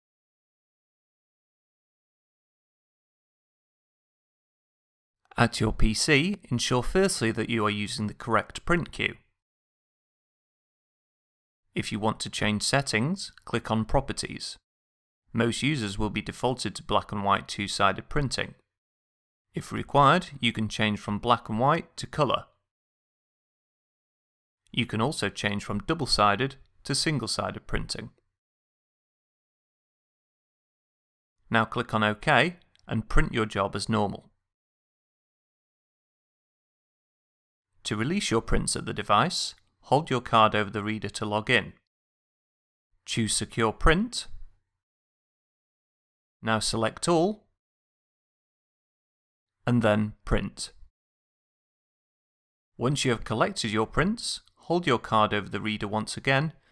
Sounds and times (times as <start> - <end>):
Speech: 5.3 - 9.3, 11.8 - 14.6, 15.3 - 18.6, 19.6 - 22.6, 24.7 - 28.2, 31.5 - 34.3, 37.8 - 41.9, 43.1 - 44.4, 46.4 - 47.5, 49.7 - 50.9, 52.8 - 56.6.